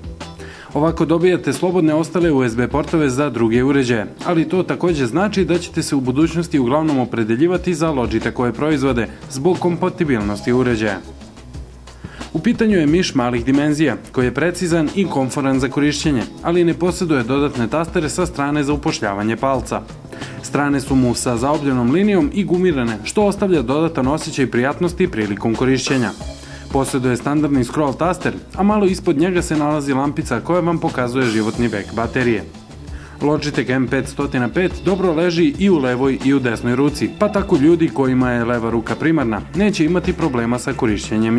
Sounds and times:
Music: 0.0s - 41.3s
Speech: 0.7s - 11.1s, 12.3s - 32.5s, 33.2s - 41.3s.

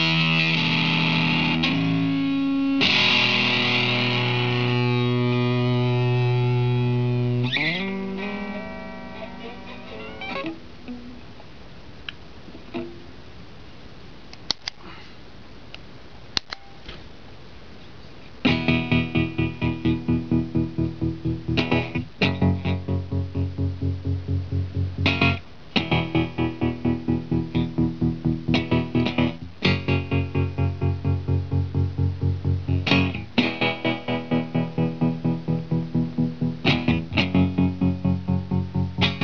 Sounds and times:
Guitar: 0.0s - 13.5s, 18.2s - 39.2s
Effects unit: 0.0s - 14.8s, 15.6s - 39.2s.

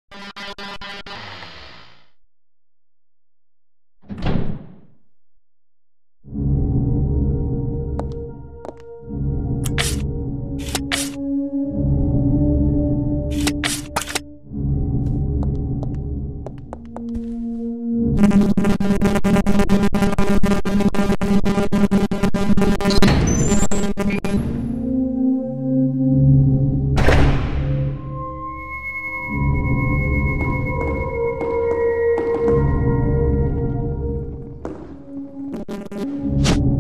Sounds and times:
Music: 6.2s - 36.8s.

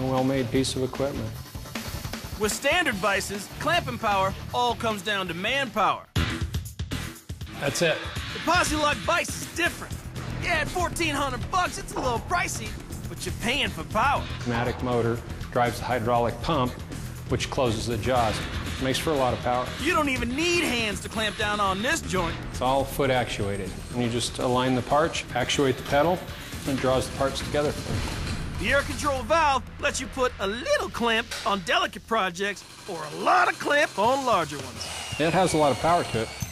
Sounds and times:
Speech: 0.0s - 1.4s, 7.6s - 27.8s, 28.6s - 36.3s
Music: 0.0s - 36.5s.

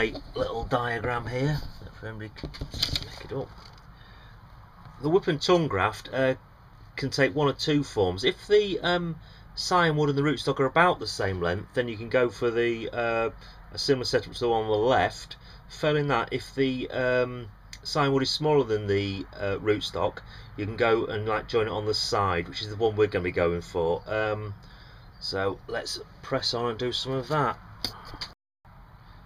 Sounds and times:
Speech: 0.0s - 3.5s, 5.0s - 6.4s, 7.0s - 24.6s, 25.2s - 27.6s.

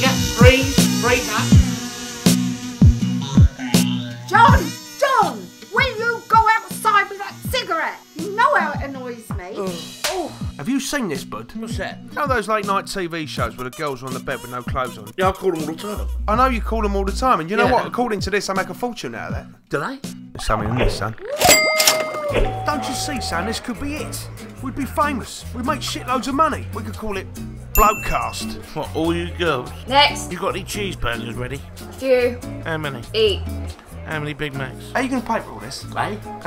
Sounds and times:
Music: 0.0s - 36.4s
Speech: 8.3s - 21.1s, 22.7s - 27.2s.

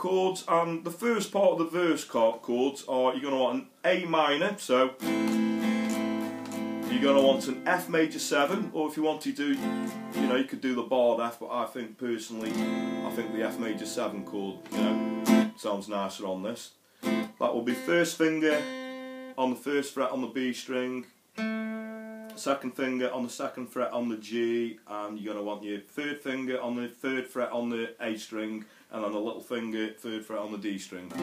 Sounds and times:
Speech: 0.0s - 5.0s, 6.9s - 9.6s, 10.2s - 16.8s, 17.4s - 18.6s, 19.4s - 21.1s, 22.3s - 31.2s
Acoustic guitar: 4.3s - 11.4s, 12.4s - 15.8s, 16.9s - 23.4s.

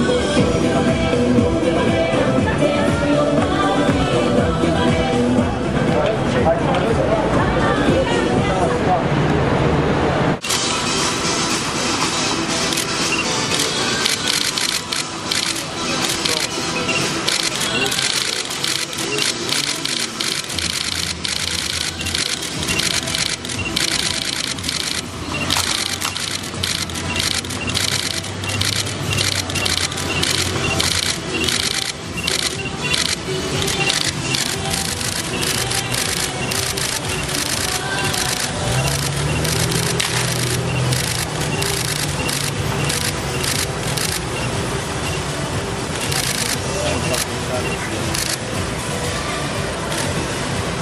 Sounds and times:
Music: 0.0s - 9.4s, 10.4s - 50.8s
Speech: 5.8s - 9.4s.

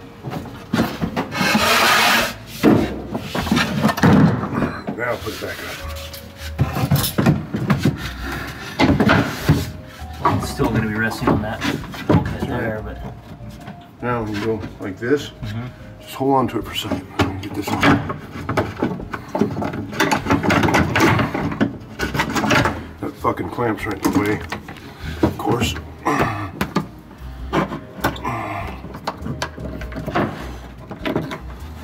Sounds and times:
Speech: 4.9s - 5.9s, 10.3s - 13.0s, 14.0s - 15.4s, 16.1s - 18.0s, 23.0s - 24.5s, 25.4s - 25.8s.

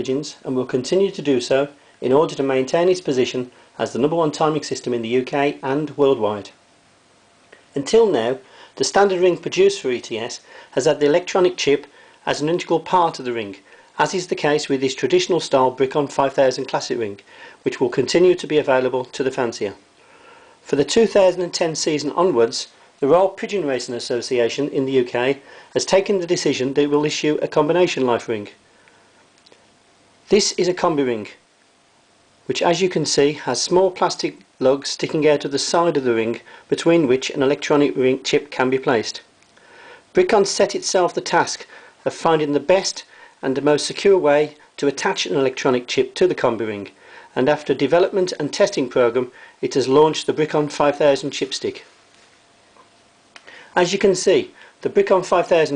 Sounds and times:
Speech: 0.0s - 6.6s, 7.7s - 19.8s, 20.6s - 28.6s, 30.3s - 31.4s, 32.5s - 39.3s, 40.1s - 51.9s, 53.8s - 55.7s.

